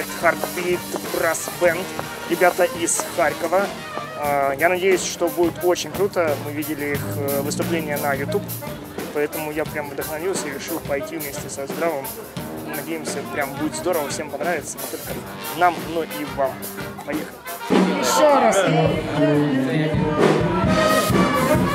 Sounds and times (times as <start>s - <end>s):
Speech: 0.0s - 20.1s
Music: 0.0s - 21.7s.